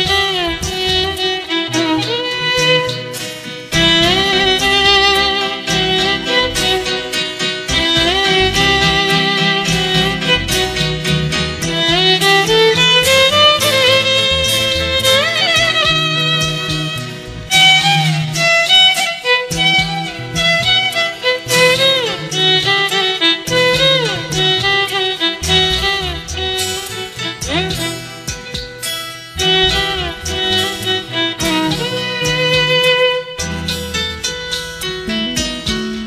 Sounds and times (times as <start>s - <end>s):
Violin, fiddle: 0.0s - 35.8s.